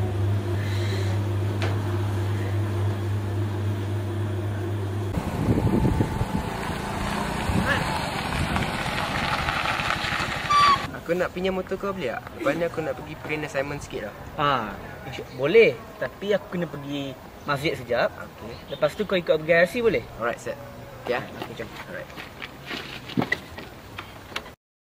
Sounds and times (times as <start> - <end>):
Outside, urban or manmade: 0.0 - 24.6.